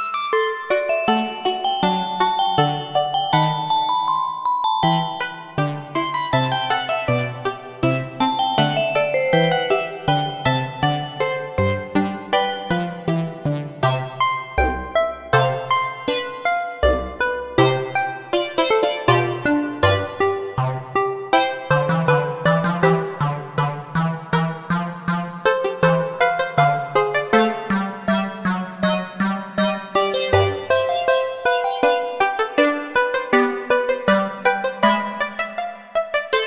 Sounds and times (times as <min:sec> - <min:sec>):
Musical instrument: 0:00.4 - 0:06.9, 0:08.0 - 0:11.6.